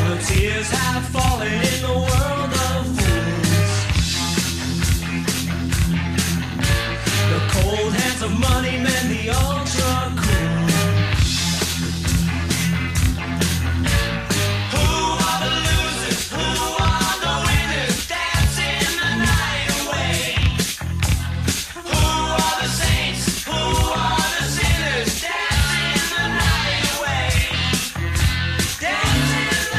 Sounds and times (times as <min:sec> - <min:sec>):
Pop music: 0:00.0 - 0:29.7
Punk rock: 0:00.0 - 0:29.7
Rock and roll: 0:00.0 - 0:29.7.